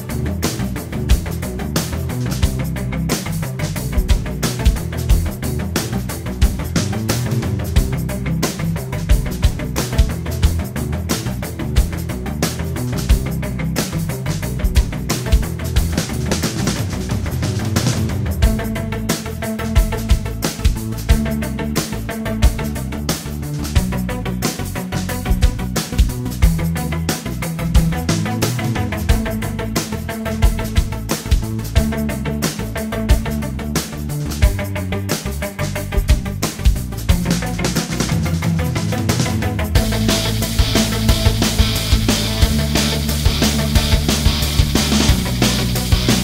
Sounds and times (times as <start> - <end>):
Music: 0.0 - 46.2.